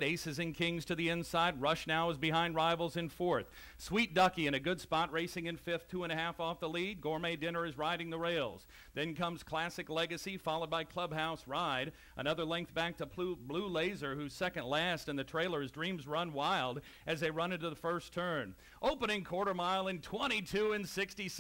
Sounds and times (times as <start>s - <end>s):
Speech: 0.0s - 21.4s.